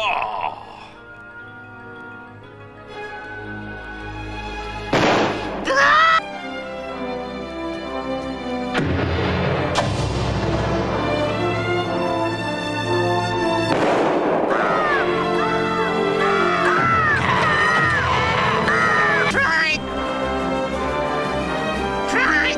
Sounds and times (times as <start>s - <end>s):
Music: 0.0s - 22.5s.